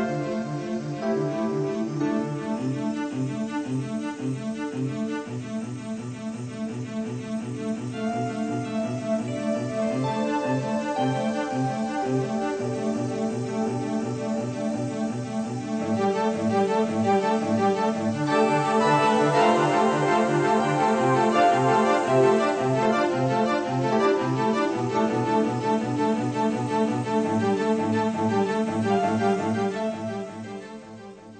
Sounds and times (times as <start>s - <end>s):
Music: 0.0s - 31.3s.